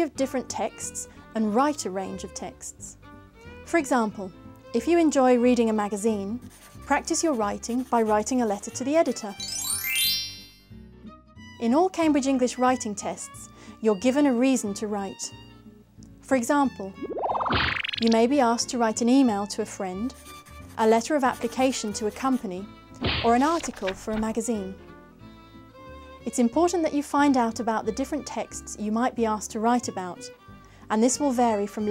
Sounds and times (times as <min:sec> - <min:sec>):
Speech: 0:00.0 - 0:03.0, 0:03.7 - 0:09.4, 0:11.6 - 0:15.3, 0:16.2 - 0:17.0, 0:18.0 - 0:20.1, 0:20.8 - 0:24.8, 0:26.2 - 0:30.3, 0:30.9 - 0:31.9
Music: 0:00.0 - 0:31.9.